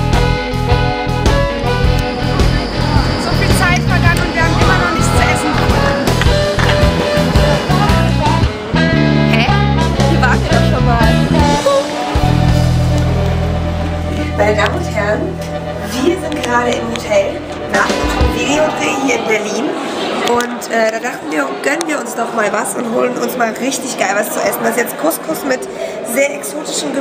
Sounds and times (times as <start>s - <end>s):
Music: 0.0s - 20.4s.